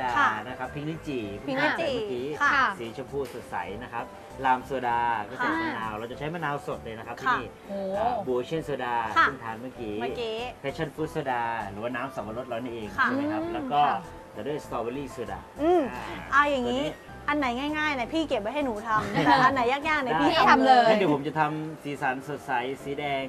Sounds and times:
Music: 0.0s - 23.2s.

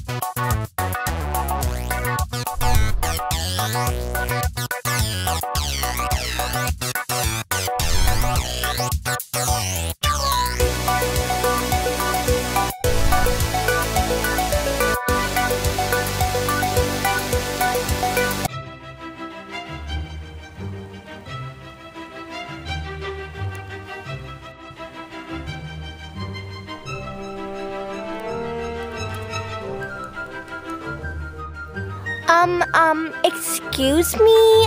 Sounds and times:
Music: 0.0s - 34.6s
Speech: 32.3s - 34.6s.

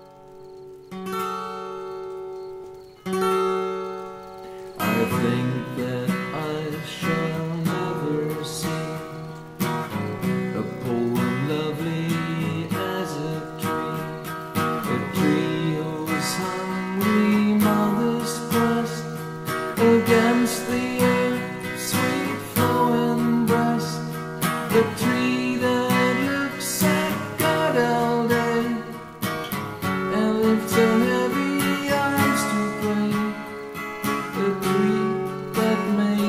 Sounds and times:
Acoustic guitar: 0.0s - 36.2s.

